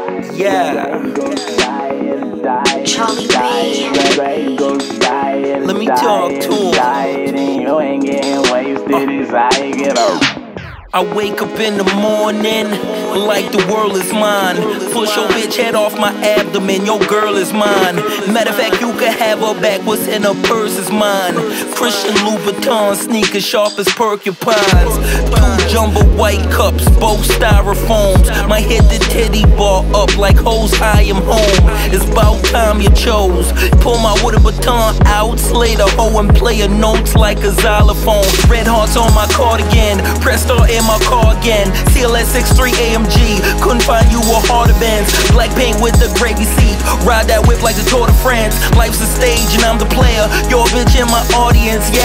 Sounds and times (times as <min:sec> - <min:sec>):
Music: 0:00.0 - 0:52.0.